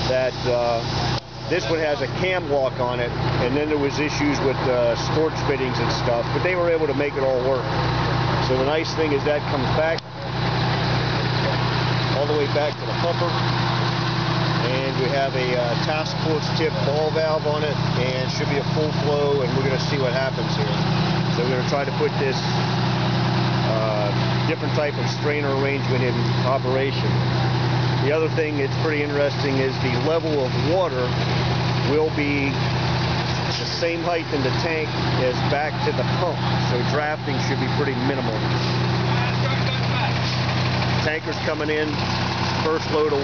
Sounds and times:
Speech: 0.0 - 7.7, 8.4 - 10.4, 11.2 - 13.4, 14.6 - 22.6, 23.6 - 27.2, 28.0 - 31.2, 31.8 - 32.6, 33.4 - 40.4, 41.0 - 42.0, 42.6 - 43.2
Vehicle: 0.0 - 43.2.

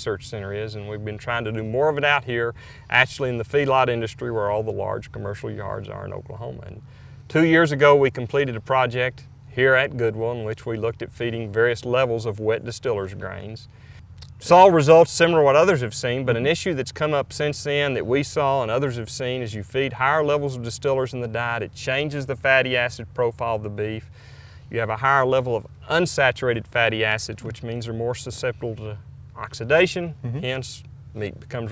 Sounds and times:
Speech: 0.0 - 24.1, 24.7 - 31.7.

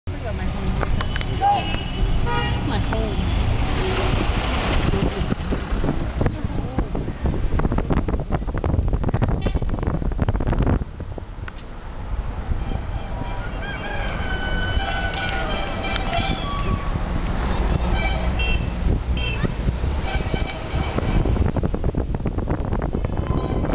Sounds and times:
Vehicle: 0.1 - 23.7.

